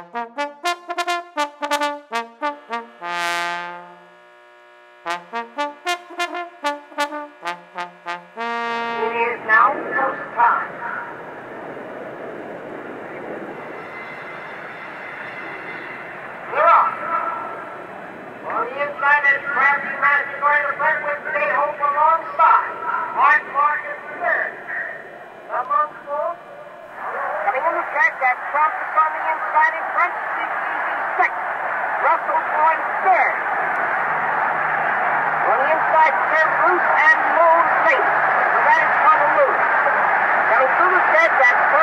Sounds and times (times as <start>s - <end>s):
Speech: 9.0s - 11.0s, 18.5s - 26.4s, 27.0s - 31.4s, 32.0s - 33.4s, 35.5s - 39.6s, 40.5s - 41.8s.